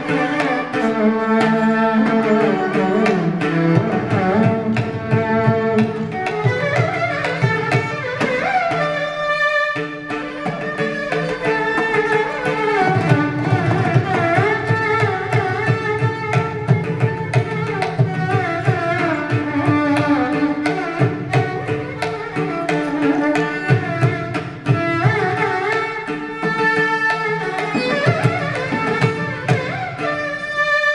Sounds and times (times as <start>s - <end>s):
Violin, fiddle: 0.0s - 30.9s.